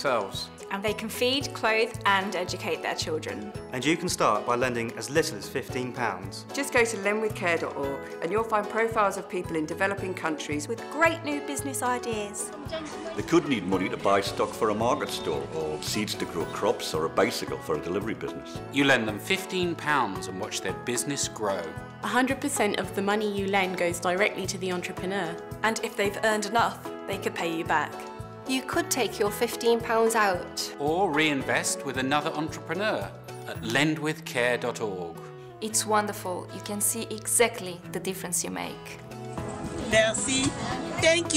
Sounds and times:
Music: 0.0s - 41.3s.

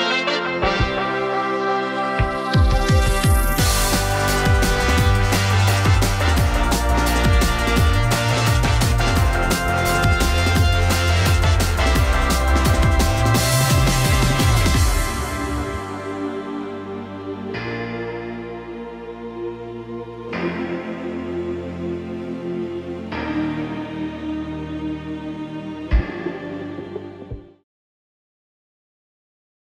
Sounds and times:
Music: 0.0s - 27.7s.

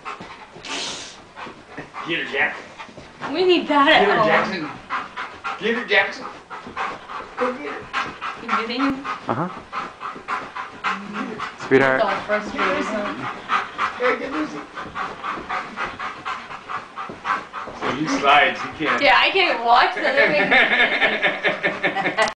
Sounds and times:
Dog: 0.0s - 21.3s.

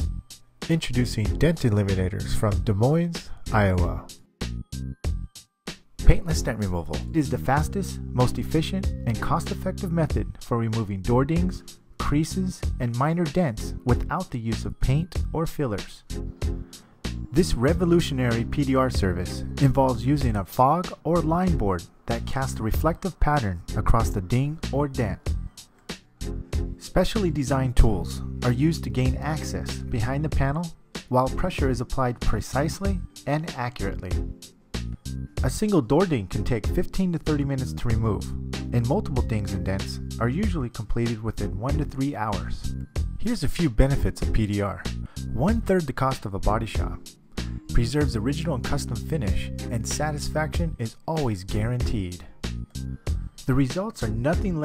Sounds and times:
Music: 0.0s - 54.6s
Speech: 0.7s - 4.1s, 6.0s - 16.1s, 17.3s - 25.3s, 26.8s - 34.2s, 35.4s - 47.0s, 47.7s - 52.3s, 53.4s - 54.6s.

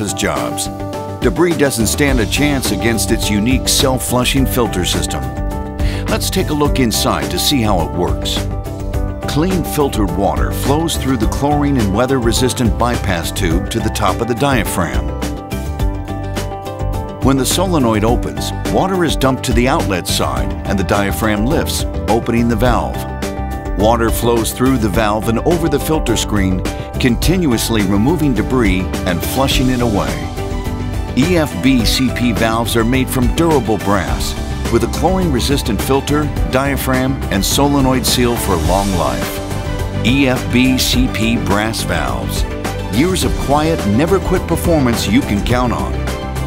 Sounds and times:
Speech: 0.0s - 5.3s, 6.1s - 8.4s, 9.3s - 15.1s, 17.2s - 23.0s, 23.8s - 30.3s, 31.2s - 39.4s, 40.0s - 46.0s
Music: 0.0s - 46.4s.

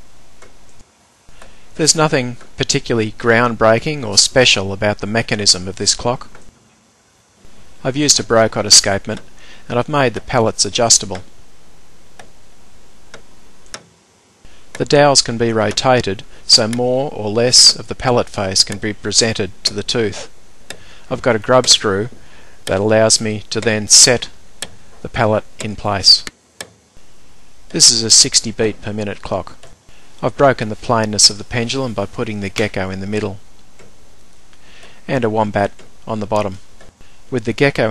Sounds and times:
Speech: 1.8s - 6.4s, 7.8s - 11.3s, 14.8s - 20.3s, 21.1s - 24.4s, 25.0s - 26.3s, 27.7s - 29.6s, 30.2s - 33.4s, 35.1s - 36.6s, 37.3s - 37.9s
Tick-tock: 22.6s - 22.8s, 23.6s - 23.8s.

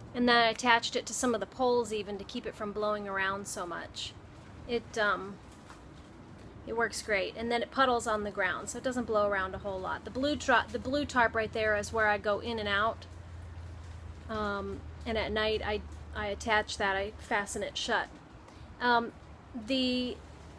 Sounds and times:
Speech: 0.2s - 5.4s, 6.7s - 13.0s, 14.3s - 18.1s, 18.8s - 20.2s.

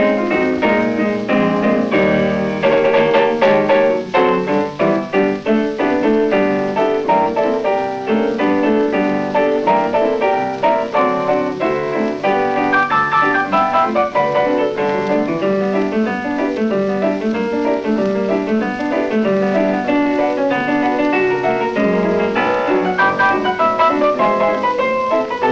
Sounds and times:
Piano: 0.0s - 25.5s.

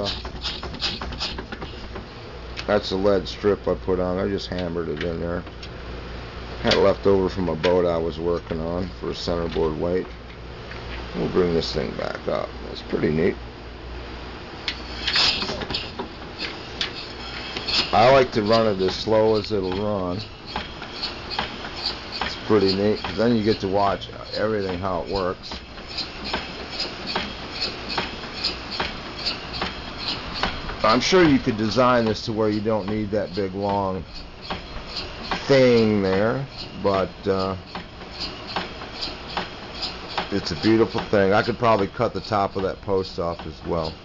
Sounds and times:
Speech: 2.6s - 5.5s, 6.6s - 10.1s, 11.1s - 13.4s, 17.9s - 20.3s, 22.3s - 25.6s, 30.8s - 34.1s, 35.4s - 37.6s, 40.3s - 44.0s.

